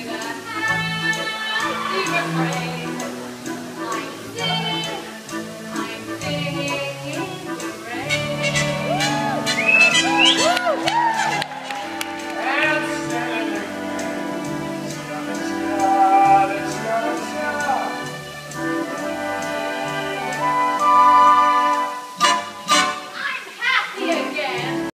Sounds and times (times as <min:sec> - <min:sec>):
Female singing: 0:00.0 - 0:03.1, 0:03.8 - 0:09.4, 0:23.9 - 0:24.9
Music: 0:00.0 - 0:24.9
Male singing: 0:12.4 - 0:13.8, 0:14.8 - 0:18.1.